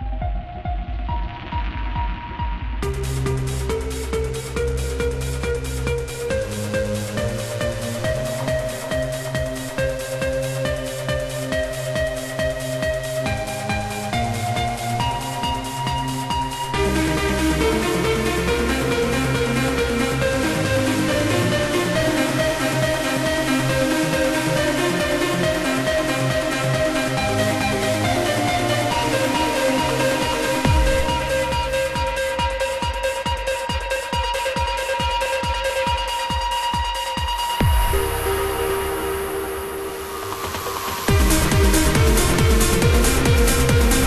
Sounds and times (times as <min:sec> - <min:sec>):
Music: 0:00.0 - 0:44.0.